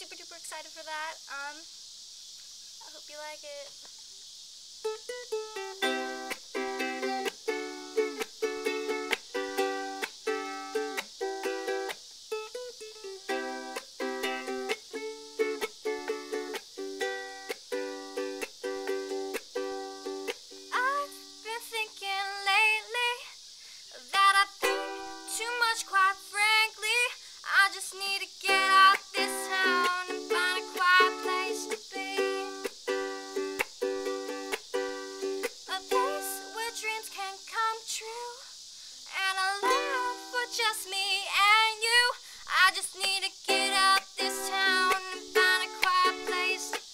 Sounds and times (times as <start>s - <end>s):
Music: 4.8s - 21.9s, 24.4s - 26.2s, 28.3s - 37.2s, 39.6s - 40.8s, 42.7s - 46.9s.